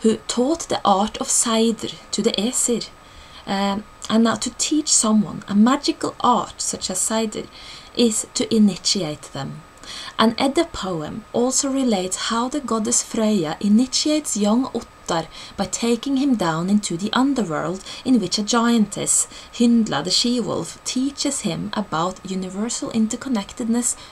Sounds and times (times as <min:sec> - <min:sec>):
Narration, monologue: 0:00.0 - 0:24.1.